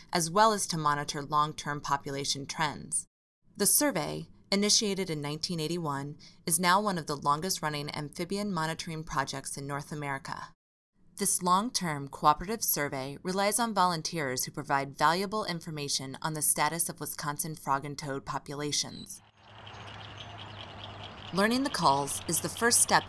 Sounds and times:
Speech: 0.1s - 10.6s, 11.2s - 19.2s, 21.4s - 23.0s.

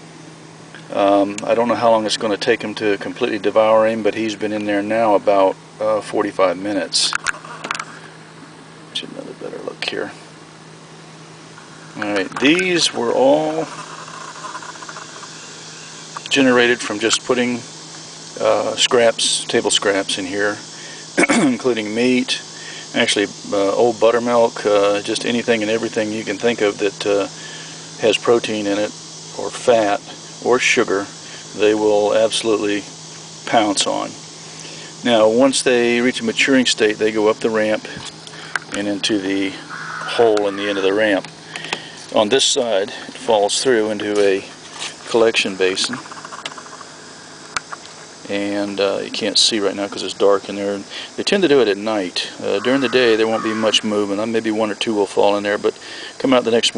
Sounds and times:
Speech: 0.9s - 7.2s, 8.9s - 10.2s, 12.0s - 13.7s, 16.3s - 17.7s, 18.4s - 20.6s, 21.2s - 27.4s, 28.0s - 34.2s, 35.0s - 38.1s, 38.7s - 41.3s, 42.1s - 46.0s, 48.2s - 56.7s.

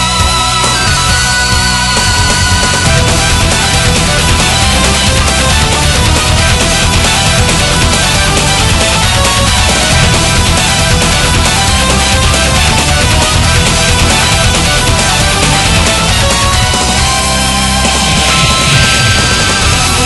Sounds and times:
Music: 0.0s - 20.0s.

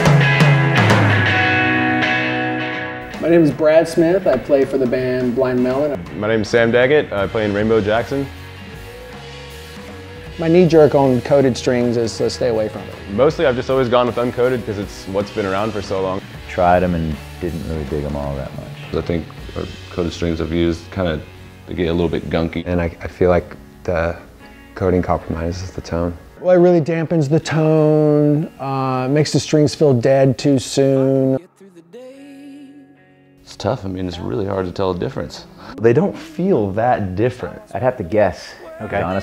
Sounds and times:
Speech: 3.2s - 8.3s, 10.4s - 24.2s, 24.8s - 31.4s, 33.5s - 39.2s.

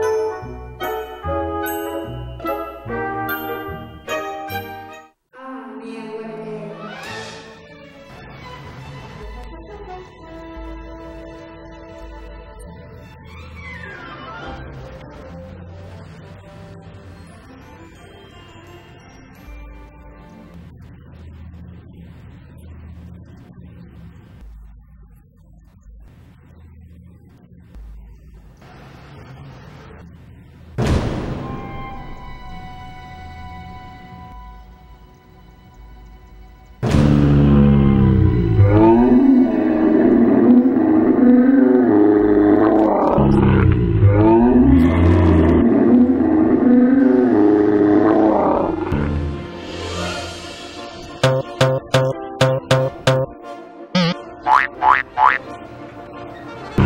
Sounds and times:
Music: 0.0s - 23.6s, 31.2s - 39.8s, 48.9s - 56.8s.

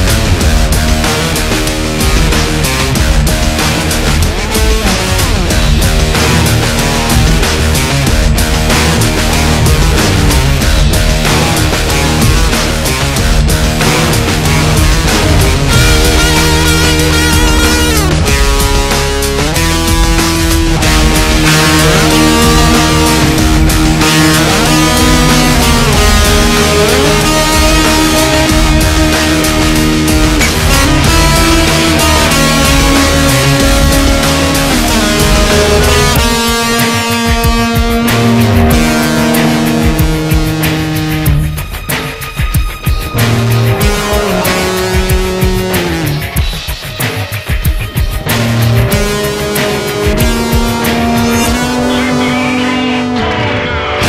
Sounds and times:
Guitar: 0.0s - 54.0s.

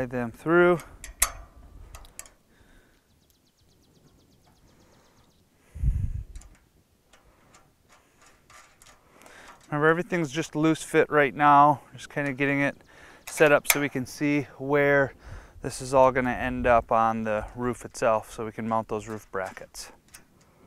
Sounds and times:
Speech: 0.0s - 0.9s, 9.7s - 20.0s.

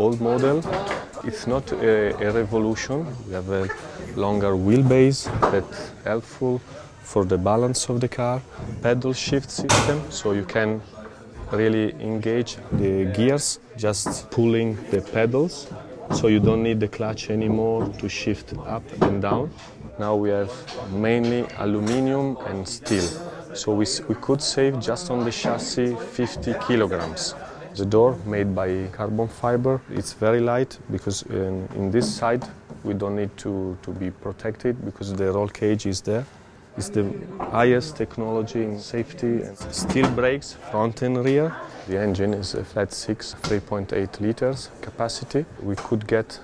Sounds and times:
Speech: 0.0s - 46.4s.

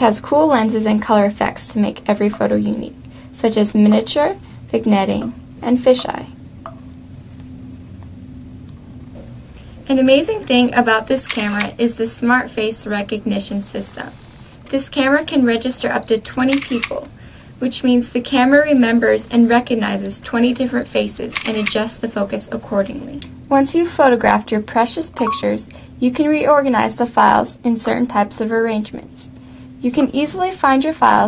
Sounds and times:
Speech: 0.0s - 6.4s, 9.9s - 31.2s
Camera: 11.2s - 11.8s, 16.4s - 17.1s, 21.2s - 21.9s.

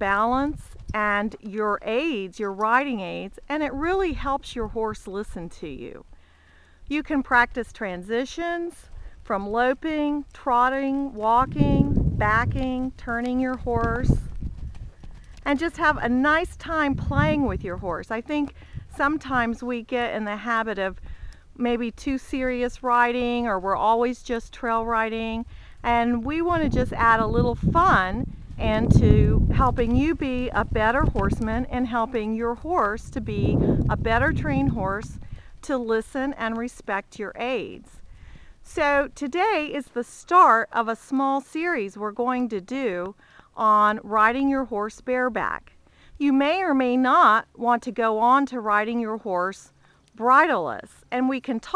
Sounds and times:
Speech: 0.0s - 6.0s, 6.9s - 14.2s, 15.5s - 21.0s, 21.6s - 35.1s, 35.7s - 37.9s, 38.7s - 51.7s.

